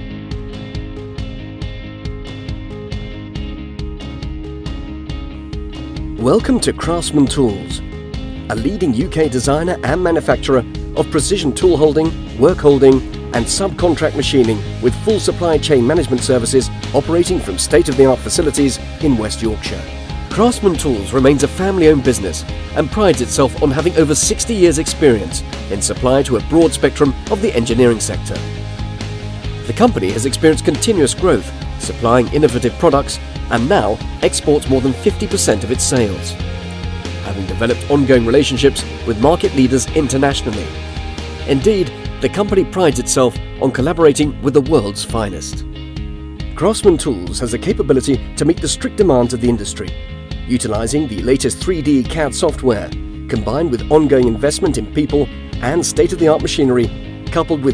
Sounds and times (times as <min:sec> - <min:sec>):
Music: 0:00.0 - 0:57.7
Speech: 0:06.2 - 0:07.8, 0:08.5 - 0:28.4, 0:29.7 - 0:36.4, 0:37.2 - 0:40.7, 0:41.5 - 0:45.6, 0:46.6 - 0:49.9, 0:50.5 - 0:57.7.